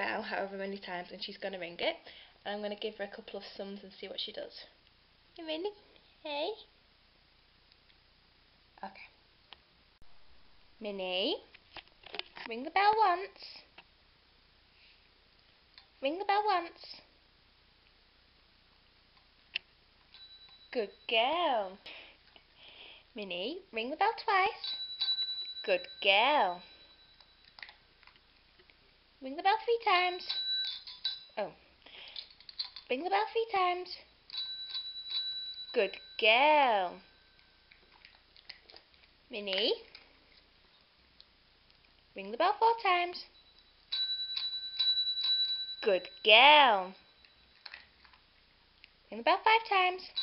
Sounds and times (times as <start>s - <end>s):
Speech: 0.0s - 4.8s, 5.4s - 6.7s, 8.8s - 9.2s, 10.8s - 11.5s, 12.4s - 13.7s, 16.0s - 17.1s, 20.8s - 21.8s, 23.2s - 24.6s, 25.7s - 26.6s, 29.2s - 30.3s, 32.9s - 34.1s, 35.8s - 37.0s, 39.3s - 39.9s, 42.2s - 43.3s, 45.9s - 47.0s, 49.1s - 50.2s.